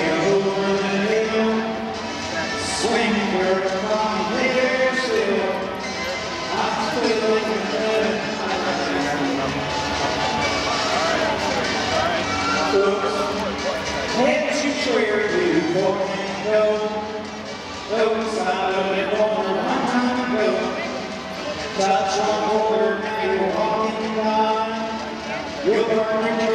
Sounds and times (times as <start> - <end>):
Speech: 0.0 - 9.6, 11.0 - 17.2, 17.9 - 26.5
Music: 0.0 - 26.5.